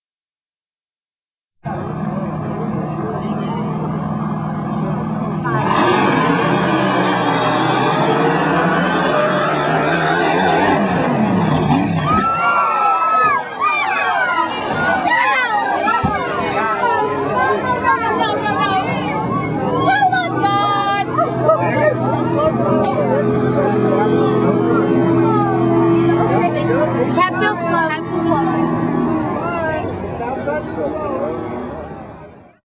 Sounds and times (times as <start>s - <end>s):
Speech: 14.2s - 28.7s.